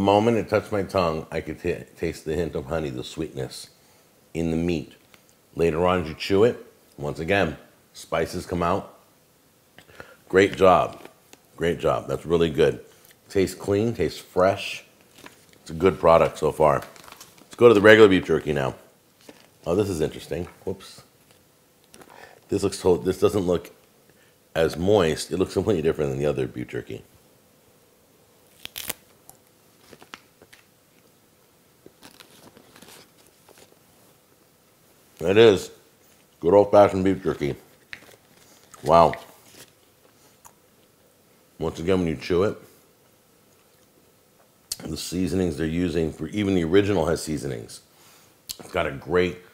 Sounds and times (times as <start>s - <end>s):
Speech: 0.0s - 3.8s, 4.4s - 5.0s, 5.6s - 9.0s, 10.3s - 14.9s, 15.6s - 18.9s, 19.6s - 21.1s, 22.5s - 23.8s, 24.5s - 27.1s, 35.2s - 35.8s, 36.4s - 37.7s, 38.8s - 39.4s, 41.6s - 42.7s, 44.7s - 47.9s, 48.5s - 49.5s
Inside, small room: 0.0s - 49.5s
Crumpling, crinkling: 15.0s - 18.5s, 19.2s - 20.6s, 28.5s - 31.1s, 31.8s - 33.8s, 37.3s - 40.5s.